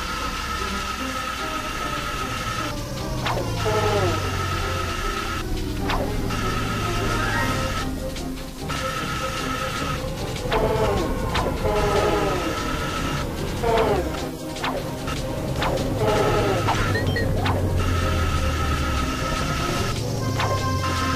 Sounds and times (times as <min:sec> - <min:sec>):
Music: 0:00.0 - 0:21.1.